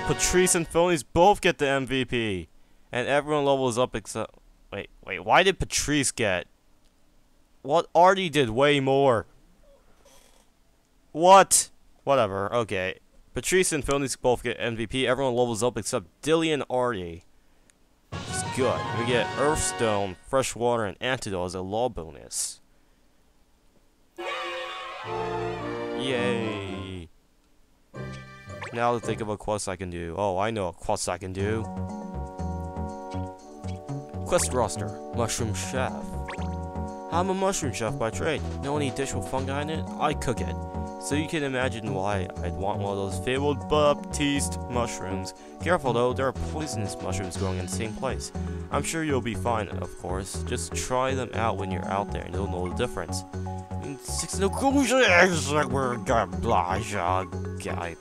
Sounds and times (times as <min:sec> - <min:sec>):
Speech: 0:00.0 - 0:06.5, 0:07.6 - 0:09.3, 0:11.1 - 0:17.3, 0:18.3 - 0:22.6, 0:26.0 - 0:27.1, 0:28.7 - 0:31.7, 0:34.3 - 0:36.1, 0:37.1 - 0:53.2, 0:53.8 - 0:58.0.